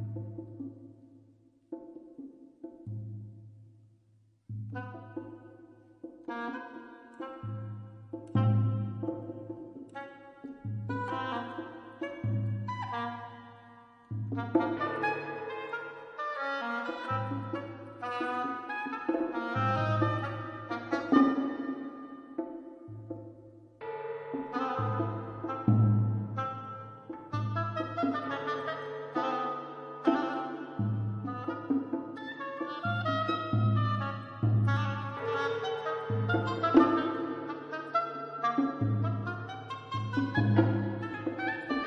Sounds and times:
Percussion: 0.0s - 41.8s.

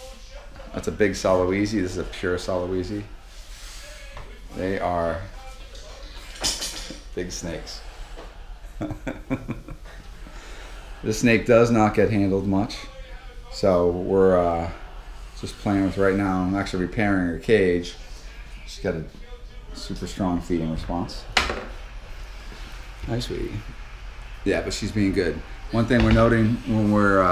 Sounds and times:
Speech: 0.0s - 6.4s, 7.1s - 7.9s, 11.0s - 21.3s, 23.0s - 23.7s, 24.5s - 27.3s.

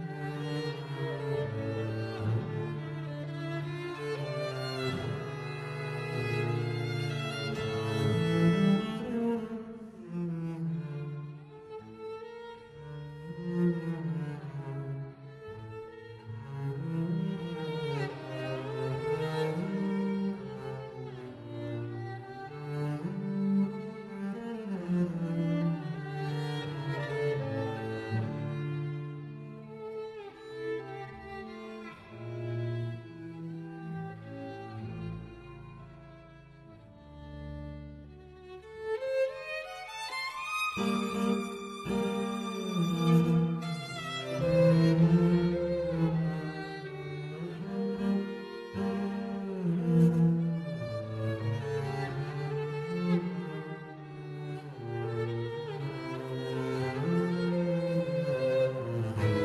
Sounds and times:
Cello: 0.0s - 59.4s
String section: 0.0s - 59.4s
Violin, fiddle: 0.0s - 59.4s.

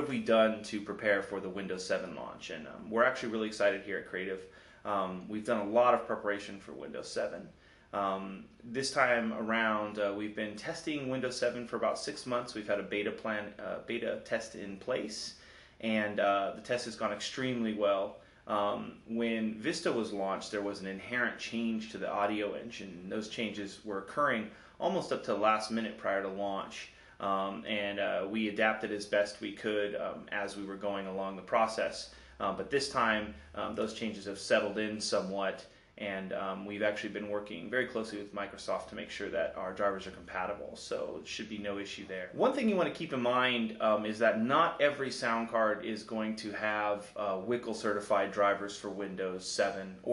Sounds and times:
Speech: 0.0s - 50.1s.

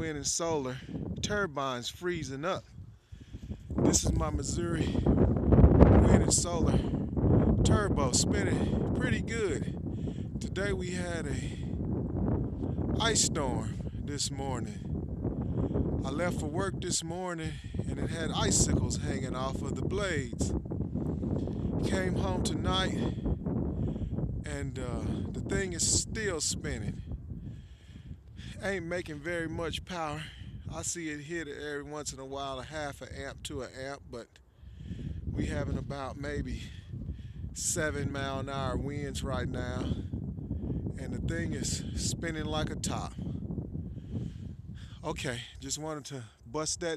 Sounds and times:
Speech: 0.0s - 2.6s, 3.8s - 5.0s, 6.0s - 6.9s, 7.6s - 9.7s, 10.4s - 11.6s, 13.0s - 14.8s, 16.0s - 20.5s, 21.8s - 23.2s, 24.5s - 27.0s, 28.5s - 34.4s, 35.4s - 36.8s, 37.6s - 40.0s, 41.0s - 43.2s, 45.0s - 46.9s
Wind noise (microphone): 0.0s - 46.9s.

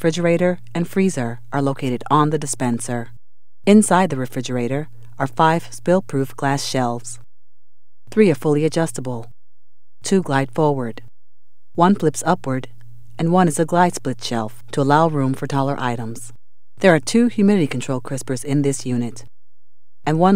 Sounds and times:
Speech: 0.0s - 3.1s, 3.7s - 7.2s, 8.1s - 9.3s, 10.0s - 11.1s, 11.8s - 19.3s, 20.1s - 20.3s.

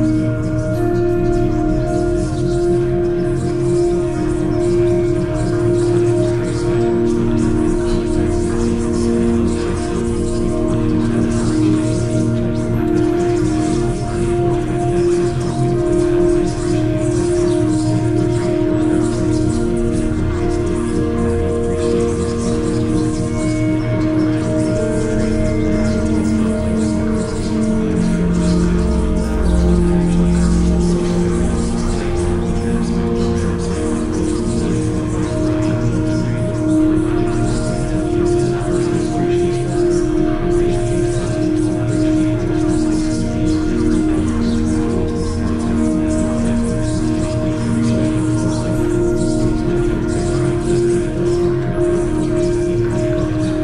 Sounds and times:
Music: 0.0s - 53.6s.

